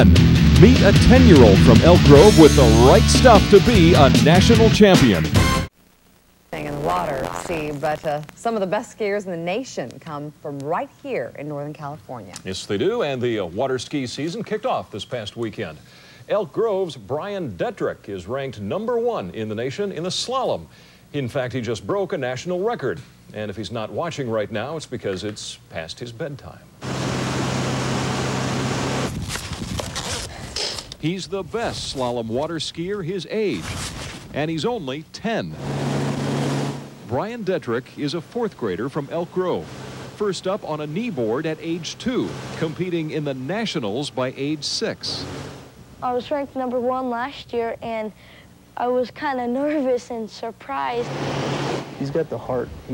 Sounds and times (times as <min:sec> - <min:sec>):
Speech: 0:00.6 - 0:05.3, 0:06.6 - 0:26.7, 0:31.0 - 0:33.6, 0:34.4 - 0:35.6, 0:37.1 - 0:39.6, 0:40.2 - 0:45.2, 0:52.0 - 0:52.9.